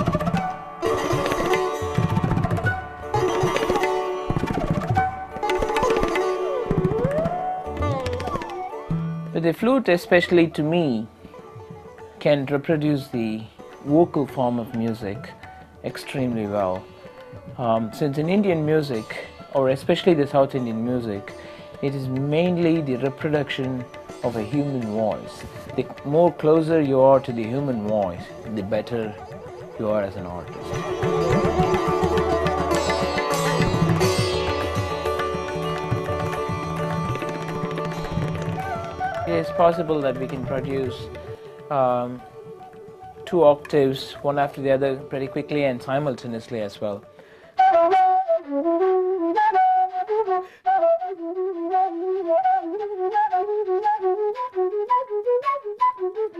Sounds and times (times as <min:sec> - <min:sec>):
Sitar: 0:00.0 - 0:47.6
Carnatic music: 0:00.0 - 0:56.3
Speech: 0:09.4 - 0:11.1, 0:12.2 - 0:16.8, 0:17.6 - 0:29.2, 0:29.8 - 0:30.8, 0:39.3 - 0:41.1, 0:41.7 - 0:42.2, 0:43.2 - 0:47.0
Classical music: 0:19.3 - 0:46.7.